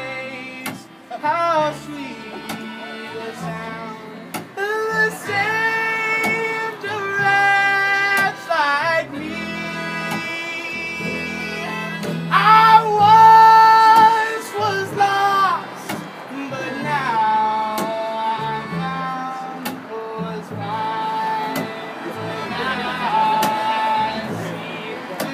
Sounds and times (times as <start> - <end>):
Music: 0.0 - 25.3.